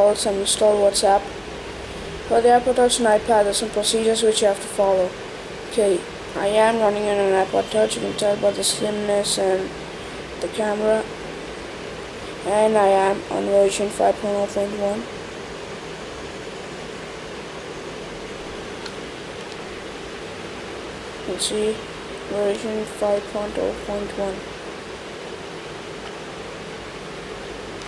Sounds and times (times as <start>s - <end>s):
Speech: 0.0s - 1.3s, 2.3s - 9.7s, 10.4s - 11.1s, 12.4s - 15.1s, 21.3s - 24.5s
Pink noise: 0.0s - 27.8s
White noise: 0.0s - 27.8s.